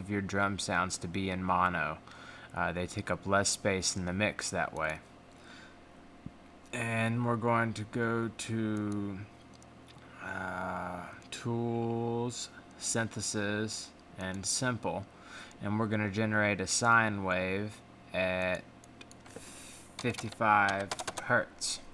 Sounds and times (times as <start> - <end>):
Speech: 0.0 - 2.0, 2.6 - 5.1, 6.7 - 9.3, 10.2 - 18.7, 20.0 - 21.9.